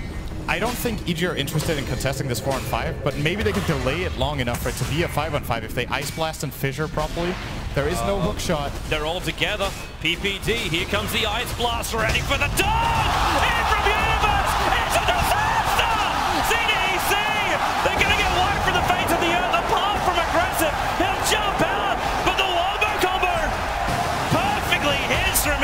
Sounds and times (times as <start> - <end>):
Speech: 0.5 - 23.5, 24.3 - 25.6.